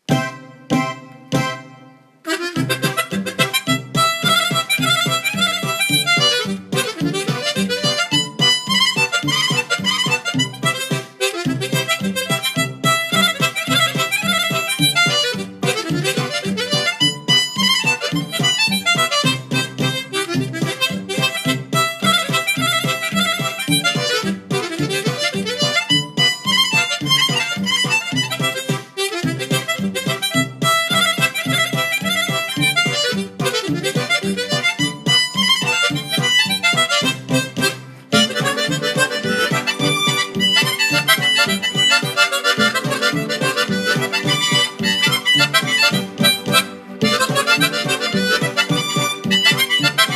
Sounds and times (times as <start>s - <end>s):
Harmonica: 0.0s - 50.1s.